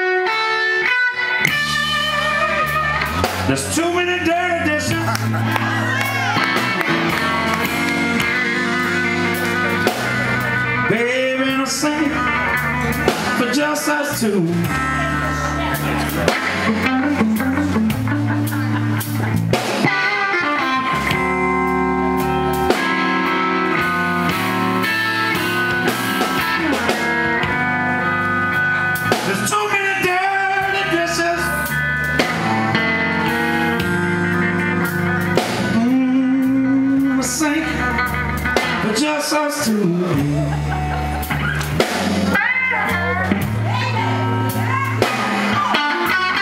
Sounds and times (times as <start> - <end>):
Music: 0.0 - 46.4.